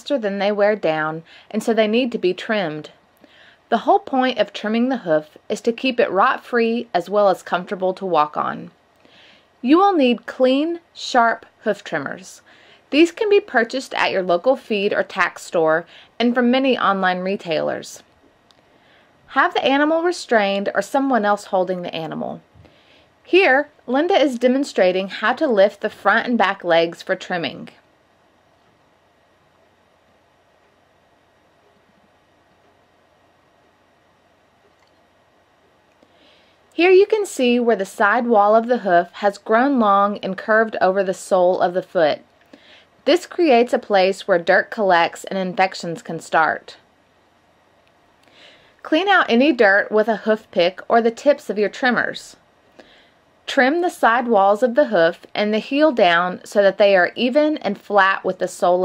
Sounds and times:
Speech: 0:00.0 - 0:03.0, 0:03.7 - 0:08.8, 0:09.6 - 0:18.1, 0:19.3 - 0:22.4, 0:23.3 - 0:27.8, 0:36.8 - 0:42.3, 0:43.0 - 0:46.8, 0:48.8 - 0:52.4, 0:53.5 - 0:58.8.

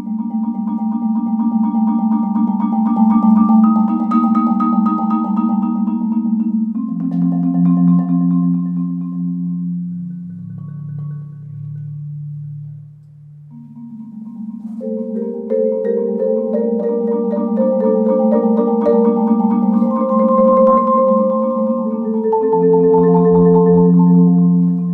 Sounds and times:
Marimba, xylophone: 0:00.0 - 0:24.9
Vibraphone: 0:00.0 - 0:24.9.

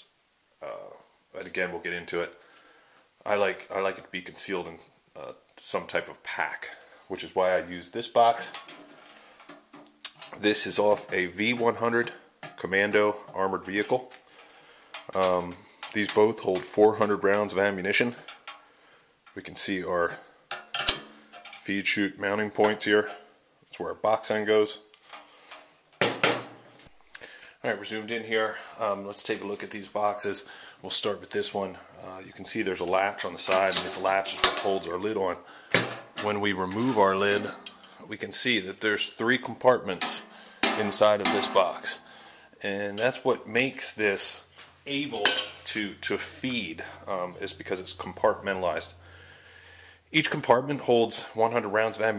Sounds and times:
Speech: 0:00.0 - 0:02.4, 0:03.2 - 0:08.7, 0:10.1 - 0:14.2, 0:15.1 - 0:18.3, 0:19.4 - 0:20.3, 0:21.6 - 0:24.9, 0:27.6 - 0:35.5, 0:36.2 - 0:49.0, 0:50.1 - 0:52.1.

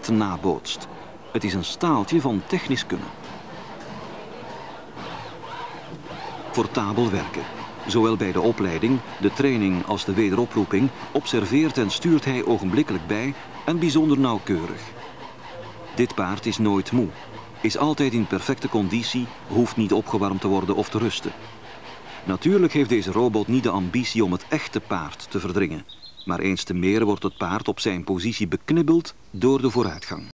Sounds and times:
Speech: 0:00.0 - 0:03.2, 0:06.5 - 0:15.0, 0:15.8 - 0:21.4, 0:22.2 - 0:30.3.

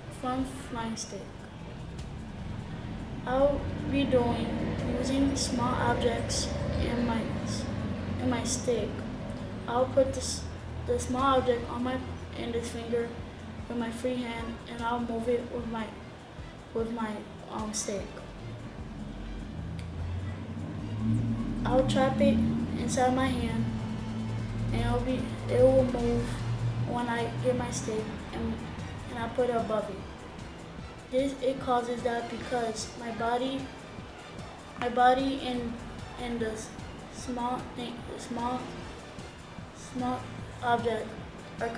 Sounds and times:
Speech: 0:03.3 - 0:09.0, 0:09.7 - 0:16.0, 0:16.8 - 0:18.2, 0:21.6 - 0:23.7, 0:24.7 - 0:30.0, 0:31.1 - 0:33.7, 0:34.8 - 0:38.7, 0:39.8 - 0:41.7.

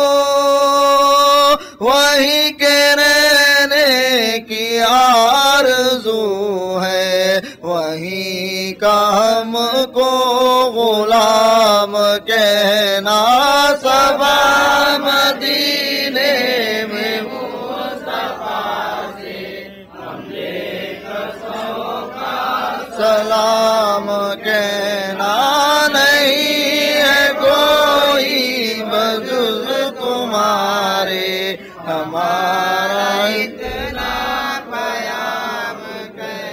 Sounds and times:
Mantra: 0:00.0 - 0:36.5.

